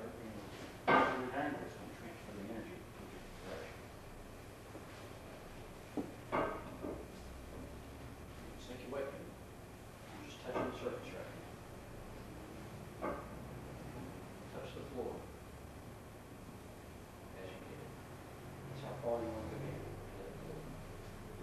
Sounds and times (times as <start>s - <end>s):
Speech: 0.0s - 3.8s, 8.6s - 9.3s, 10.1s - 11.5s, 14.5s - 15.3s, 17.4s - 18.0s, 18.7s - 20.8s.